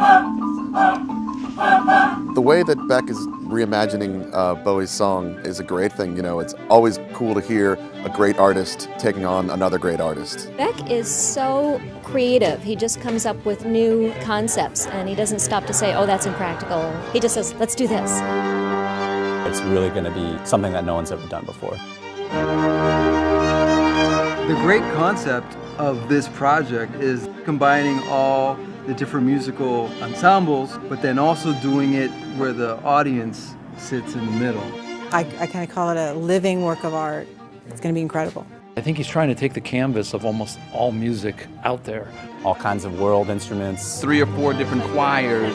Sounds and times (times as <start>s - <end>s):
Music: 0.0s - 45.5s
Speech: 2.4s - 18.2s, 19.5s - 21.8s, 24.5s - 45.5s.